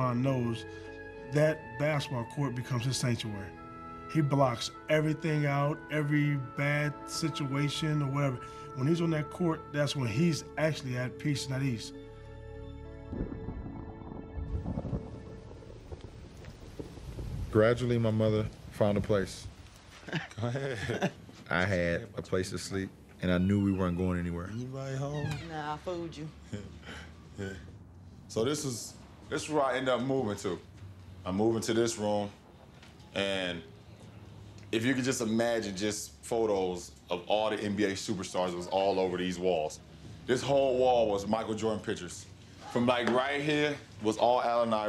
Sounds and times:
Music: 0.0s - 16.8s.

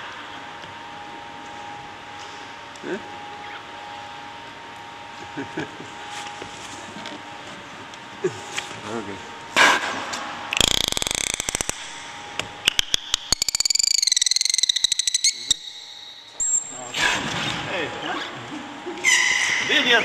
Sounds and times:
Inside, large room or hall: 0.0s - 20.0s.

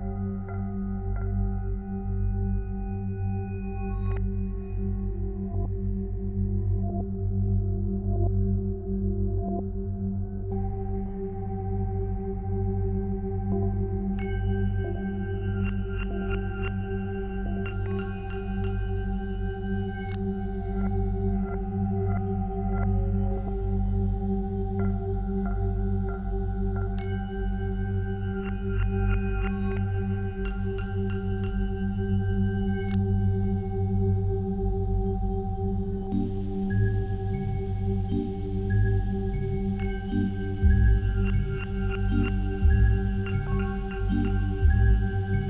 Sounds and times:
Music: 0.0s - 45.4s.

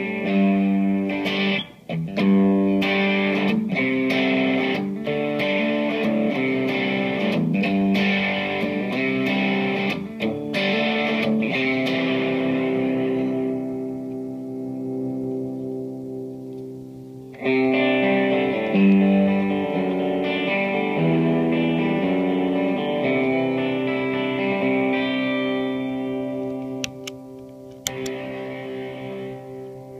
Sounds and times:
Steel guitar, slide guitar: 0.0s - 30.0s.

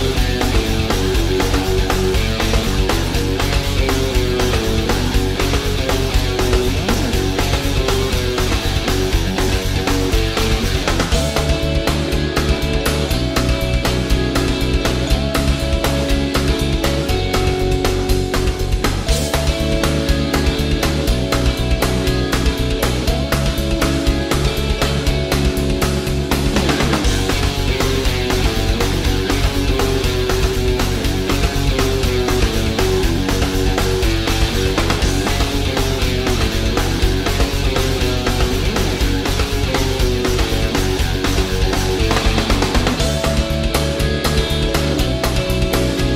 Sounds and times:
Theme music: 0.0s - 46.1s.

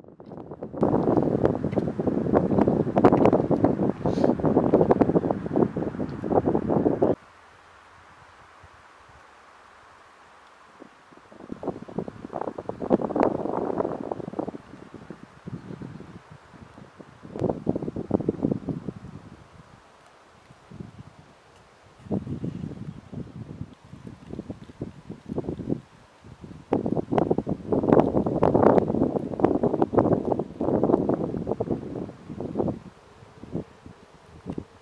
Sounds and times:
Wind noise (microphone): 0.0s - 7.2s, 10.8s - 19.8s, 20.5s - 21.3s, 21.9s - 34.8s.

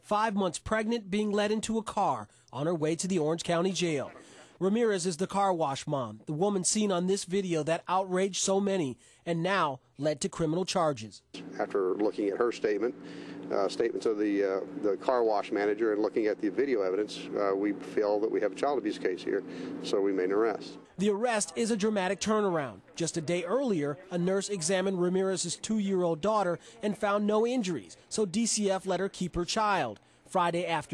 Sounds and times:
Speech: 0.0s - 30.9s.

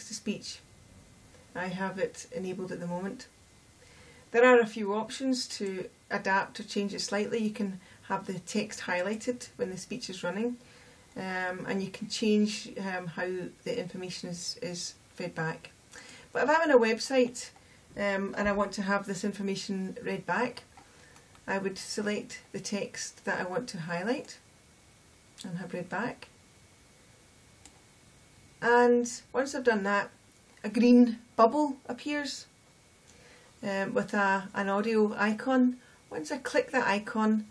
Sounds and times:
Female speech, woman speaking: 0.0s - 0.6s, 1.5s - 3.3s, 4.3s - 10.6s, 11.2s - 15.7s, 16.4s - 20.7s, 21.5s - 24.4s, 25.4s - 26.3s, 28.6s - 32.5s, 33.6s - 37.5s.

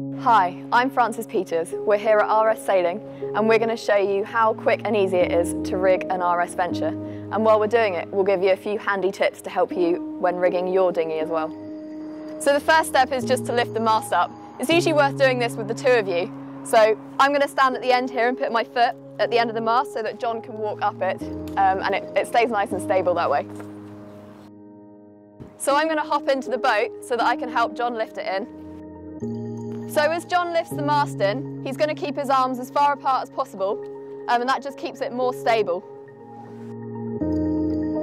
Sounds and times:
Music: 0.0s - 38.0s
Speech: 0.2s - 11.5s, 12.4s - 23.6s, 25.6s - 28.5s, 30.0s - 35.8s.

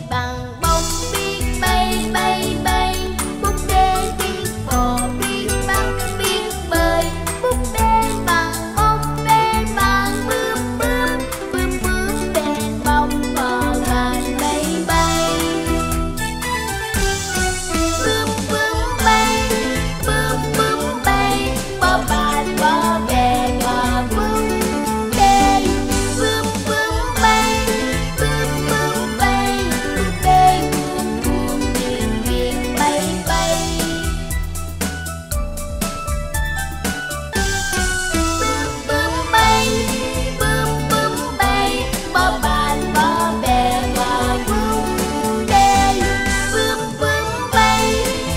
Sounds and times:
Music for children: 0.0s - 48.3s.

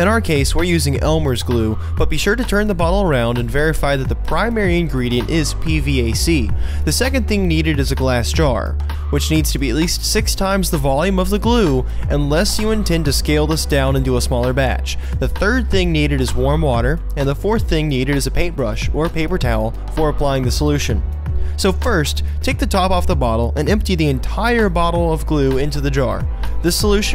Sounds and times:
Music: 0.0s - 27.1s
Speech: 0.0s - 27.1s.

